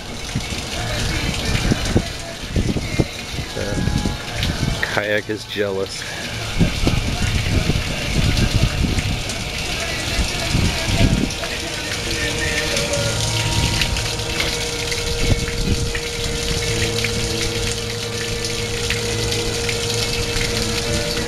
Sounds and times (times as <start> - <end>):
Water: 0.0 - 21.2.